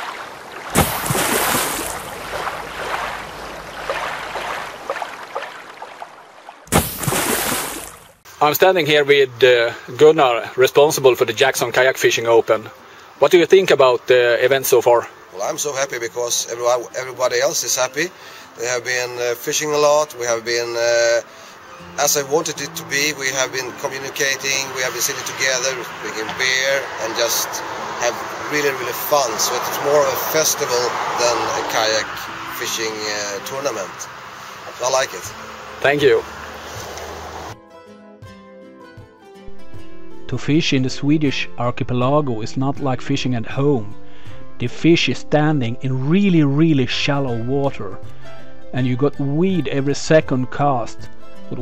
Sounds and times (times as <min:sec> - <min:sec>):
Vehicle: 0:01.9 - 0:04.9, 0:22.7 - 0:37.6
Speech: 0:08.4 - 0:21.2, 0:22.0 - 0:34.1, 0:34.7 - 0:36.2, 0:40.3 - 0:43.9, 0:44.6 - 0:48.0, 0:48.7 - 0:51.6
Music: 0:10.7 - 0:30.8, 0:31.6 - 0:51.6.